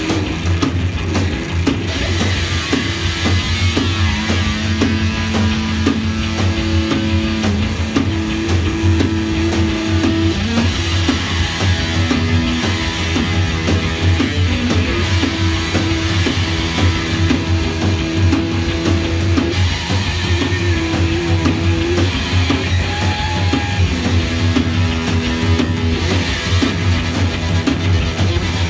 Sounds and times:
Music: 0:00.0 - 0:28.7.

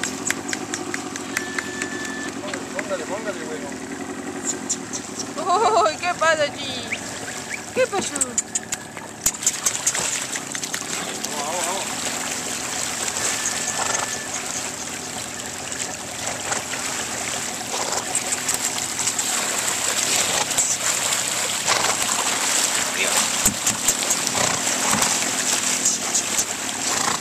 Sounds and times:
Speech: 0:11.2 - 0:11.9
Horse: 0:13.2 - 0:14.9, 0:17.6 - 0:27.2.

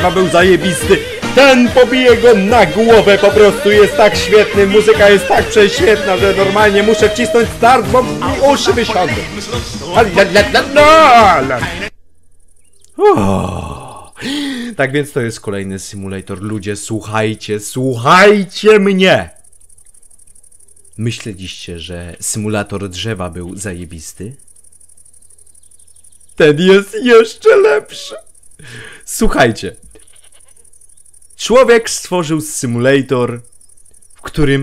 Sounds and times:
Music: 0:00.0 - 0:11.9
Speech: 0:00.0 - 0:11.9, 0:13.0 - 0:19.4, 0:21.0 - 0:24.4, 0:26.4 - 0:28.2, 0:29.1 - 0:29.8, 0:31.4 - 0:33.4, 0:34.3 - 0:34.6.

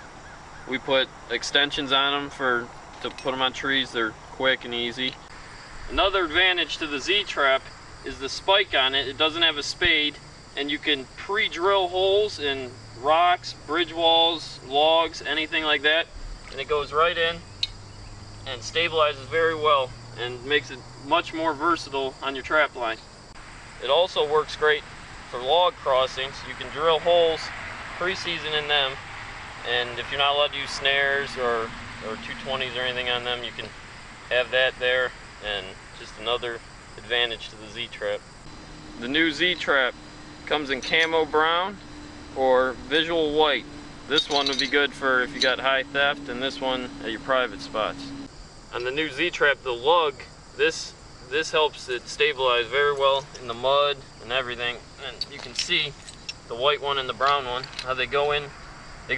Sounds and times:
Speech: 0:00.7 - 0:05.2, 0:05.9 - 0:17.4, 0:18.5 - 0:23.0, 0:23.8 - 0:29.0, 0:29.6 - 0:33.7, 0:34.3 - 0:38.2, 0:39.0 - 0:39.9, 0:40.5 - 0:41.8, 0:42.4 - 0:58.5.

